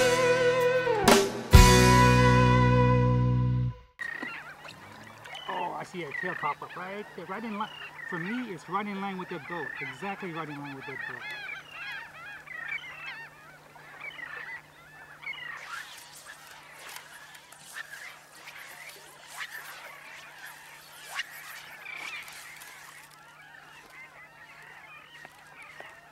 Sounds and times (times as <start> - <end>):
Outside, rural or natural: 0.0 - 26.1
Speech: 5.5 - 11.2.